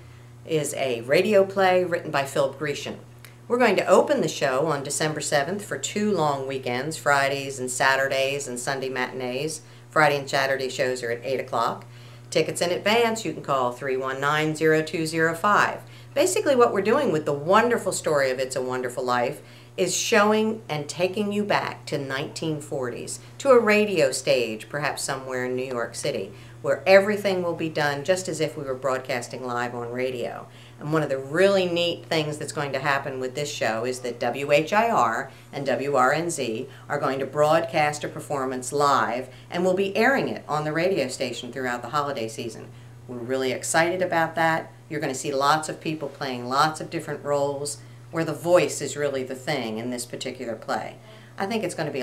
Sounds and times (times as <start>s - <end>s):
Speech: 0.5s - 52.0s.